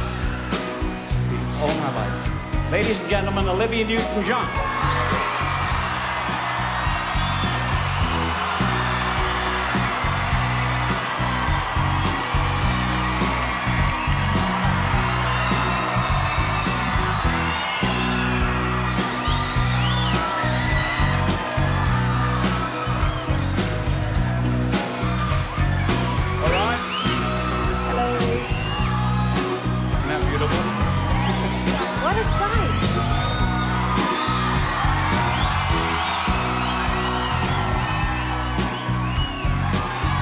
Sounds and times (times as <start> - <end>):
Music: 0.0 - 40.2
Speech: 1.4 - 4.5.